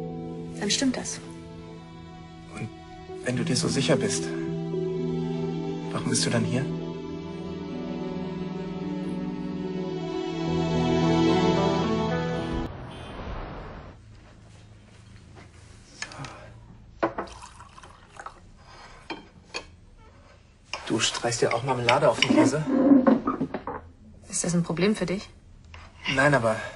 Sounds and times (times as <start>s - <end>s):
Music: 0.0s - 12.7s.